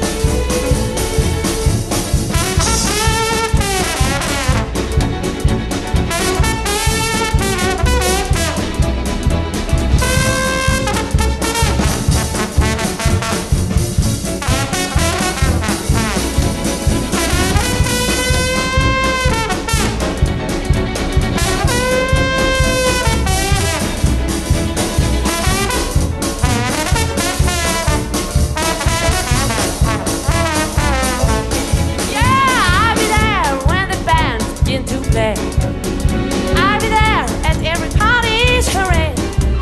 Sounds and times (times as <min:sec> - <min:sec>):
Trombone: 0:00.0 - 0:39.6.